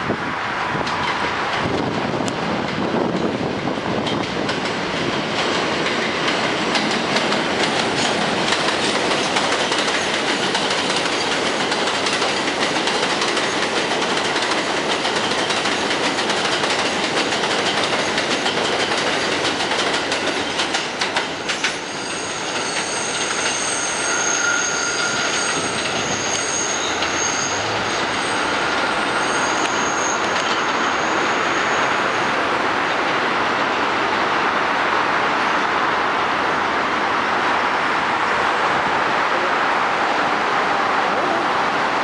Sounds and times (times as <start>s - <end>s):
Outside, urban or manmade: 0.0s - 42.0s
Railroad car, train wagon: 0.0s - 42.0s
Train: 0.0s - 42.0s.